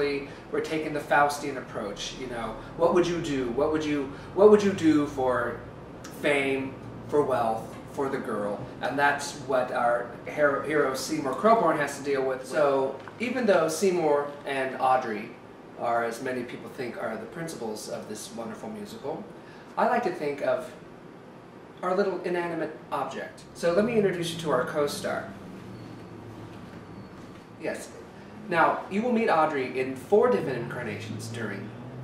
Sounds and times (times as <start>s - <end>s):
Speech: 0.0s - 20.8s, 21.8s - 25.4s, 27.6s - 31.7s.